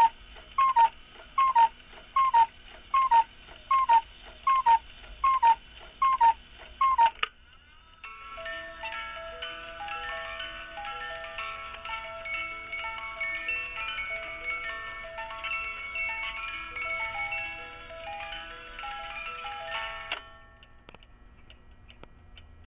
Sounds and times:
Music: 6.8 - 21.5.

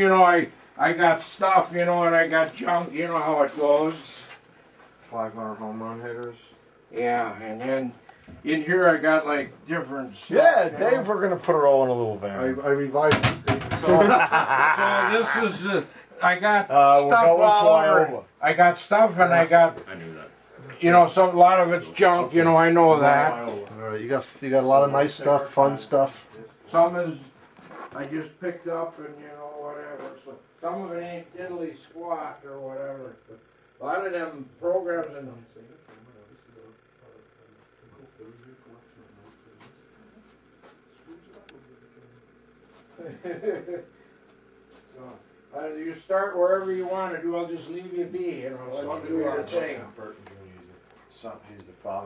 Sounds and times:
Speech: 15.0 - 27.3, 28.0 - 40.3.

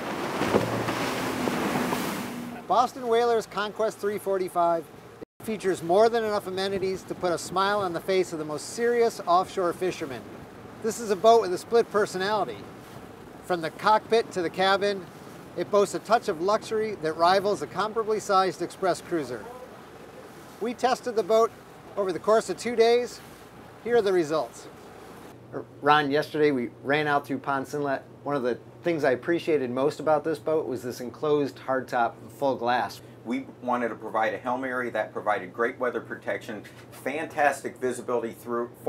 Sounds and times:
Speech: 2.6 - 12.6, 13.5 - 19.7, 20.6 - 23.2, 23.8 - 24.7, 25.5 - 38.8.

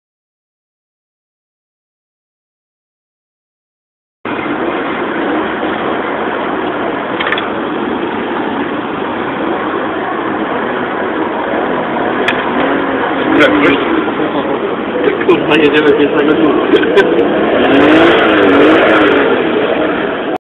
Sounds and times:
Speech: 13.2 - 17.2.

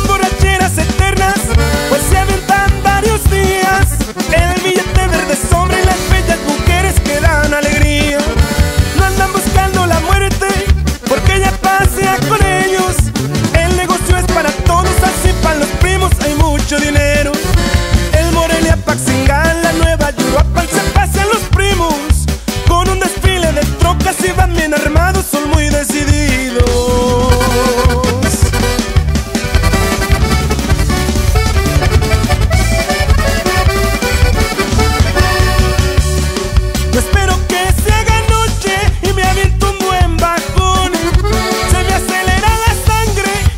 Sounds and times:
Music of Latin America: 0.0 - 43.5.

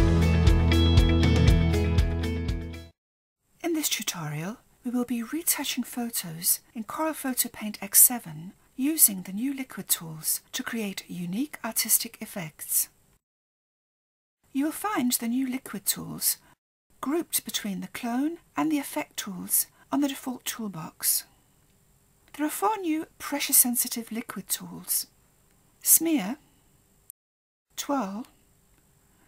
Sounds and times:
Speech: 3.6 - 13.0, 14.5 - 21.3, 22.3 - 25.1, 25.8 - 26.4, 27.8 - 28.4.

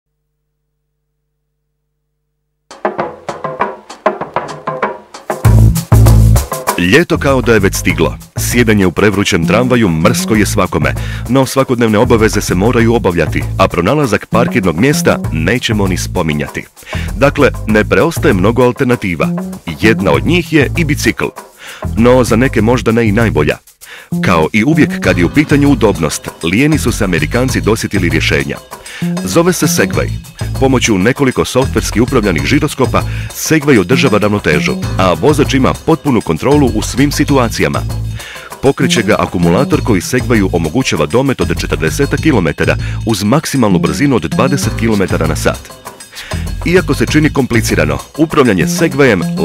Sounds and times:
Music: 2.7 - 49.4
Speech: 6.8 - 23.6, 24.2 - 37.9, 38.6 - 45.7, 46.6 - 49.4.

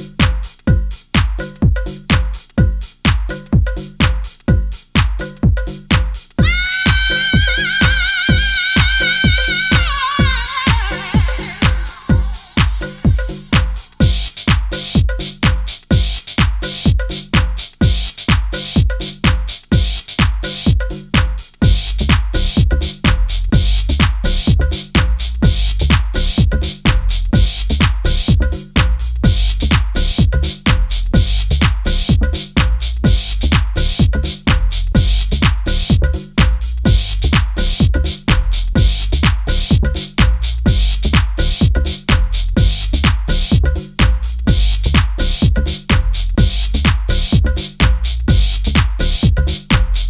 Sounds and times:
Music: 0.0 - 50.0.

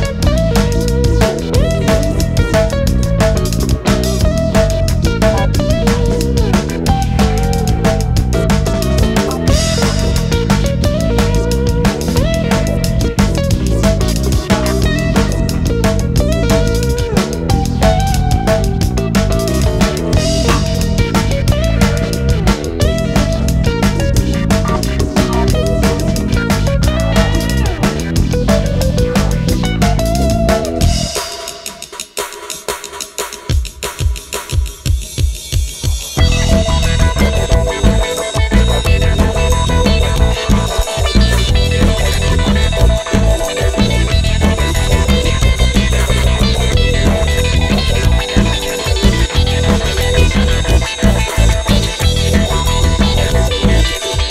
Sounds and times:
Music: 0.0 - 54.3.

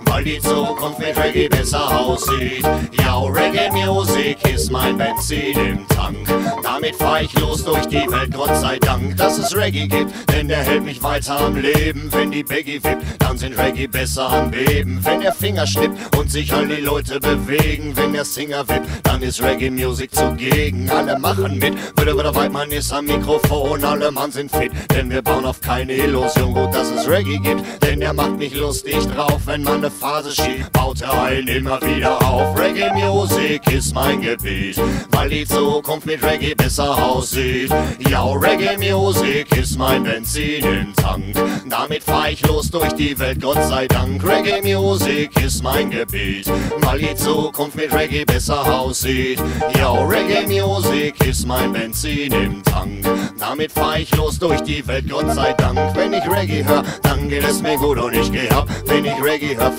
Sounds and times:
Music: 0.0 - 59.7.

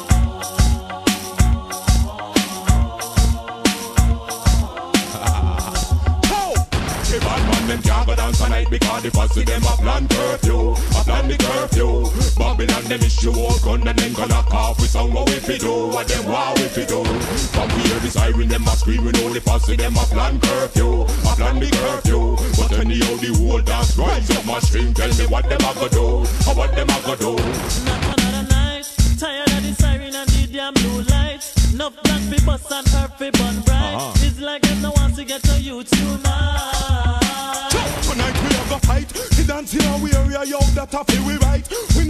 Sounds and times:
Funk: 0.0 - 42.0.

